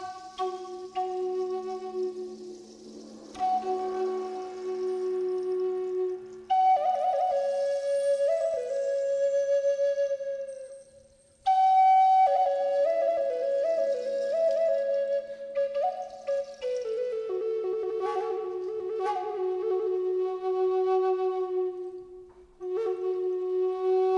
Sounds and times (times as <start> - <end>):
Flute: 0.0 - 24.1.